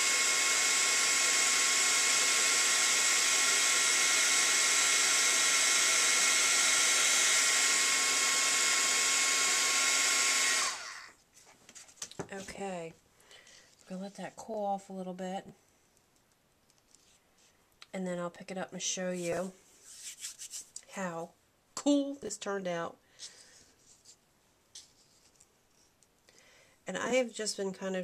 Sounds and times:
Hair dryer: 0:00.0 - 0:11.1.

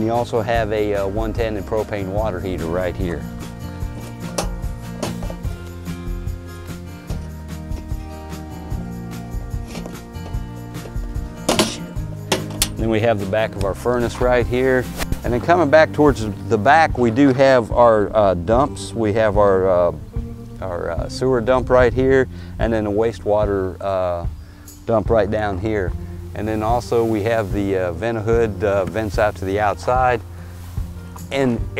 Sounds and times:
Speech: 0:00.0 - 0:03.3, 0:12.8 - 0:20.0, 0:20.6 - 0:24.3, 0:24.9 - 0:30.2, 0:31.3 - 0:31.7
Music: 0:00.0 - 0:31.7.

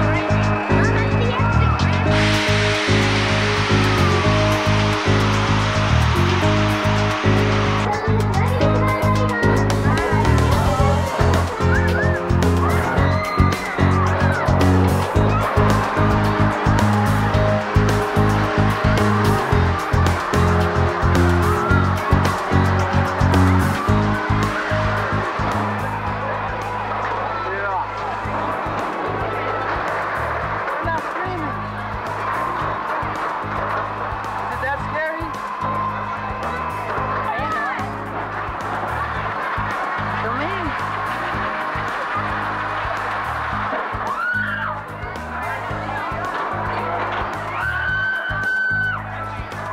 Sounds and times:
Speech: 0:00.0 - 0:02.3, 0:07.8 - 0:13.0, 0:30.8 - 0:31.7
Music: 0:00.0 - 0:49.7.

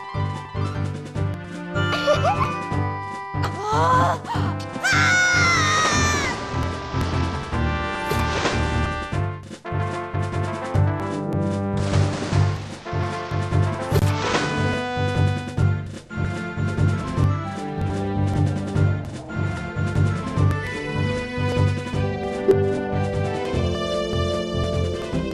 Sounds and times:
Music: 0:00.0 - 0:25.3.

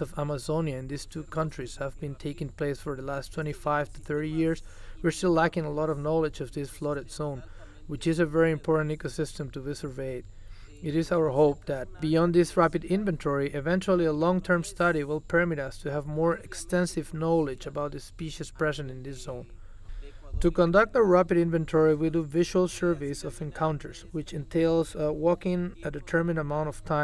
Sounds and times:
Speech: 0:00.0 - 0:27.0.

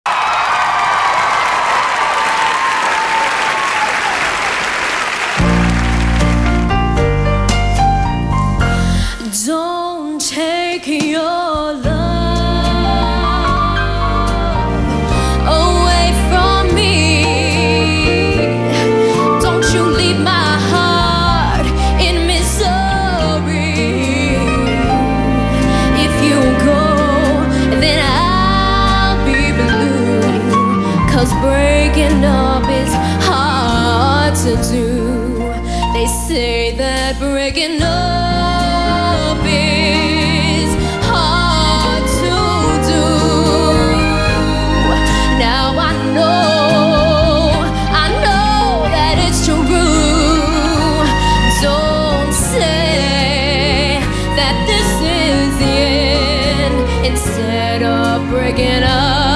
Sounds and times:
Applause: 0:00.0 - 0:07.1
Music: 0:05.2 - 0:59.3.

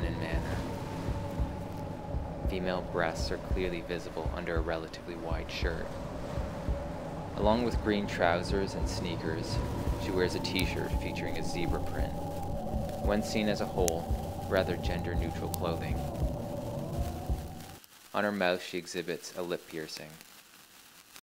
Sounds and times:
Speech: 0:00.0 - 0:00.6, 0:02.5 - 0:05.9, 0:07.4 - 0:12.2, 0:13.0 - 0:16.0, 0:18.2 - 0:20.2.

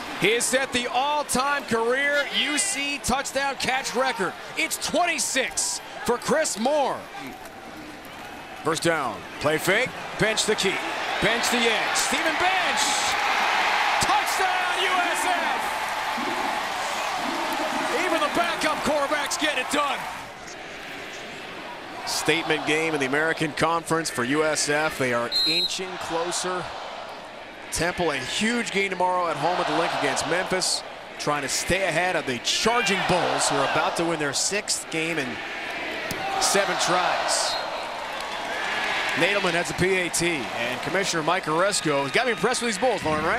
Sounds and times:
Speech: 0:00.2 - 0:07.4, 0:08.7 - 0:13.1, 0:14.0 - 0:15.7, 0:17.9 - 0:20.1, 0:22.1 - 0:26.7, 0:27.7 - 0:35.4, 0:36.3 - 0:37.6, 0:39.2 - 0:43.3.

